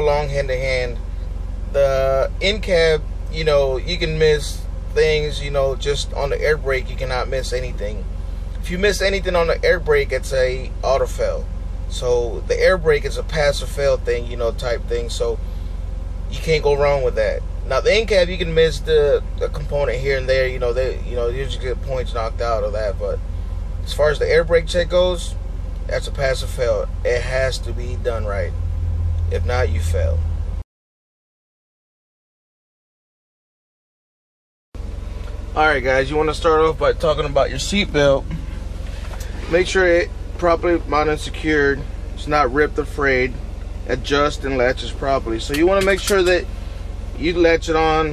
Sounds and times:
Speech: 0:00.0 - 0:01.0, 0:01.7 - 0:15.4, 0:16.3 - 0:23.2, 0:23.8 - 0:28.6, 0:29.3 - 0:30.2, 0:35.5 - 0:38.5, 0:39.2 - 0:46.5, 0:47.2 - 0:48.1.

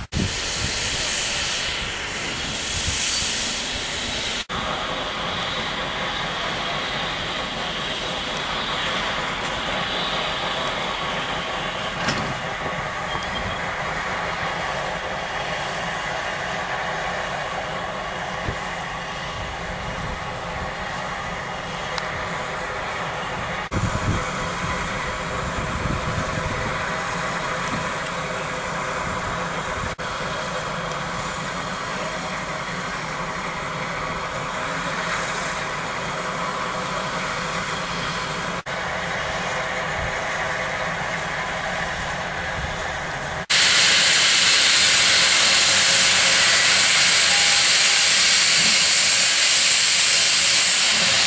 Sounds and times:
Hiss: 0:00.0 - 0:51.2.

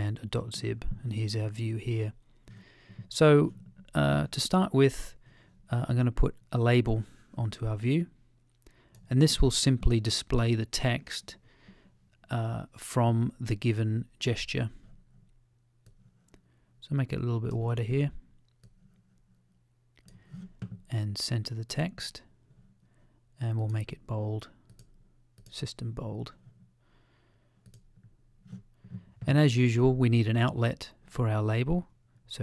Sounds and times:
Speech: 0:00.0 - 0:02.2, 0:03.1 - 0:08.2, 0:09.1 - 0:11.4, 0:12.2 - 0:14.8, 0:16.8 - 0:18.3, 0:20.9 - 0:22.3, 0:23.4 - 0:24.6, 0:25.5 - 0:26.4, 0:29.2 - 0:32.4
Inside, small room: 0:00.0 - 0:32.4.

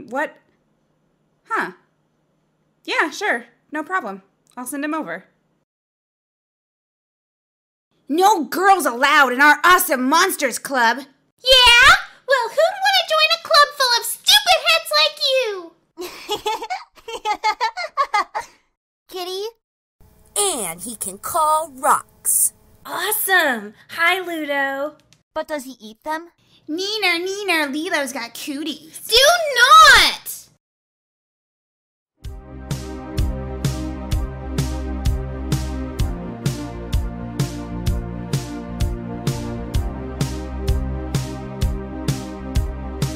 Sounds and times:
Speech: 0:00.0 - 0:00.4, 0:01.5 - 0:01.8, 0:02.9 - 0:05.3, 0:08.1 - 0:15.7, 0:19.1 - 0:19.6, 0:20.4 - 0:30.5.

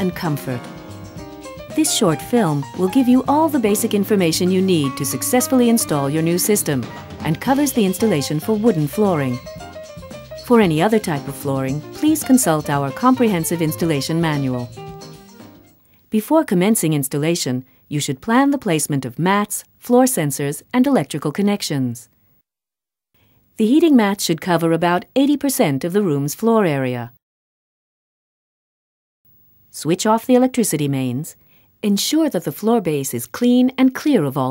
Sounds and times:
Speech: 0:00.0 - 0:00.7, 0:01.8 - 0:09.4, 0:10.5 - 0:14.7, 0:16.1 - 0:22.1, 0:23.6 - 0:27.2, 0:29.8 - 0:34.5.

